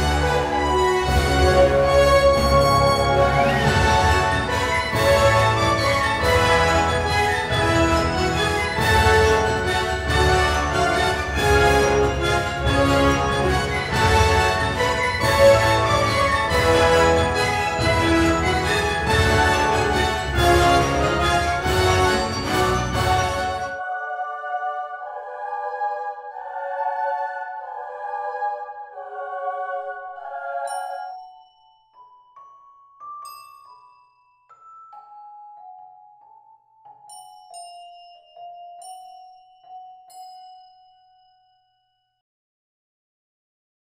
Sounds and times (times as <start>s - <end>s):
Marimba, xylophone: 0.0s - 23.8s, 30.7s - 42.0s
Chime: 0.0s - 24.2s, 30.6s - 42.2s
Glockenspiel: 0.0s - 27.6s, 30.6s - 42.2s.